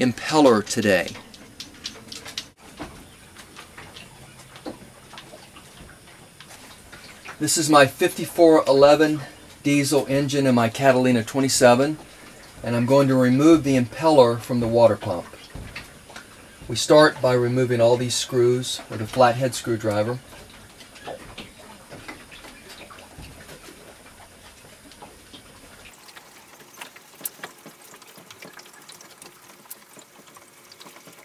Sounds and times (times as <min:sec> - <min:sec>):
Speech: 0:00.0 - 0:01.2, 0:07.4 - 0:12.0, 0:12.6 - 0:15.3, 0:16.7 - 0:20.2.